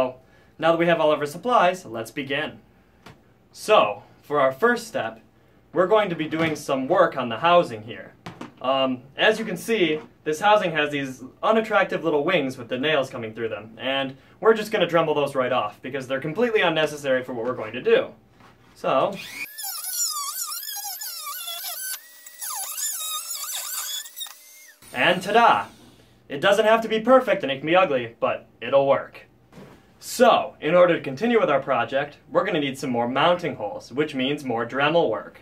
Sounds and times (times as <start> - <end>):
Speech: 0.0 - 2.6, 3.5 - 5.2, 5.8 - 18.2, 18.8 - 19.2, 24.9 - 29.3, 30.0 - 35.4.